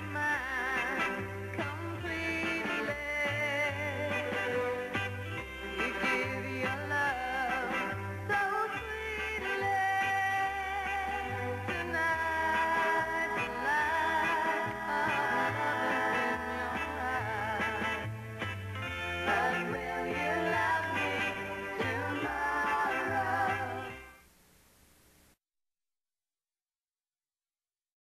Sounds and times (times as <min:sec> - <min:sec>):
Music: 0:00.0 - 0:24.3.